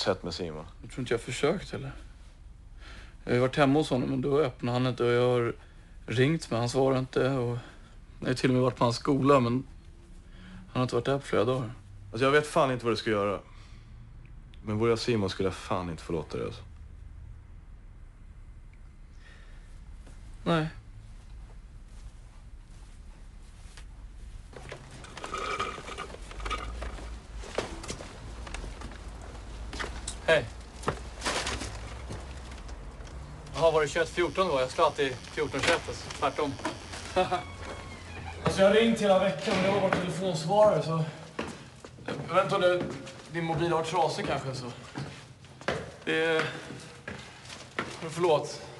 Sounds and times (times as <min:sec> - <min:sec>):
Speech: 0:00.0 - 0:02.0, 0:03.3 - 0:09.7, 0:10.7 - 0:13.4, 0:14.6 - 0:16.7, 0:20.4 - 0:20.8, 0:33.6 - 0:36.6, 0:38.4 - 0:41.2, 0:42.3 - 0:44.8, 0:48.0 - 0:48.7.